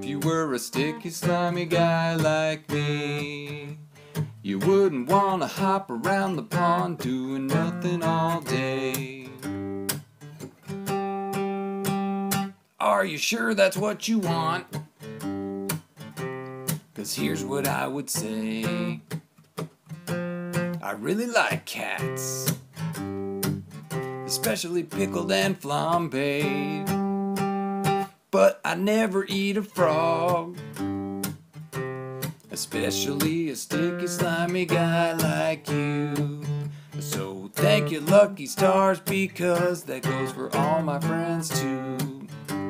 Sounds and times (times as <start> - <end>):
Music: 0.0 - 12.6, 13.8 - 20.9, 22.0 - 28.2, 29.0 - 42.7
Speech: 12.8 - 14.7, 17.0 - 19.0, 20.8 - 22.6, 24.3 - 26.1, 28.4 - 29.4.